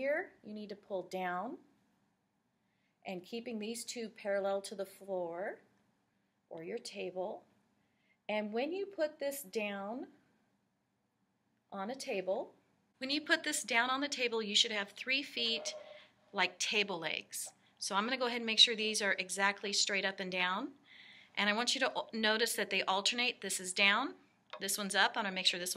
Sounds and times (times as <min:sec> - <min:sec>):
Speech: 0:00.0 - 0:01.7, 0:03.1 - 0:05.7, 0:06.5 - 0:07.5, 0:08.3 - 0:10.2, 0:11.8 - 0:20.8, 0:21.4 - 0:25.7.